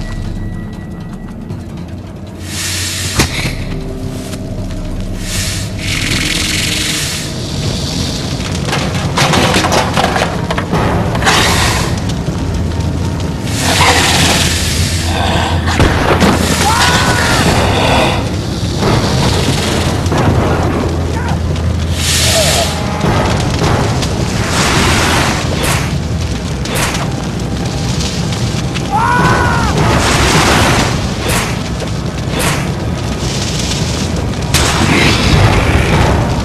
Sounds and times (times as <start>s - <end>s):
Music: 0.0s - 19.1s.